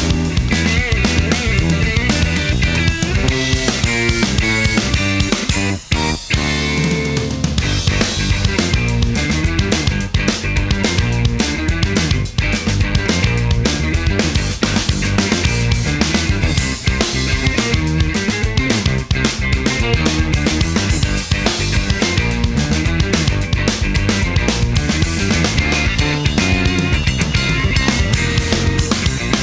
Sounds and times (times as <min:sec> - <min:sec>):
Bass drum: 0:00.0 - 0:29.4
Drum kit: 0:00.0 - 0:29.4.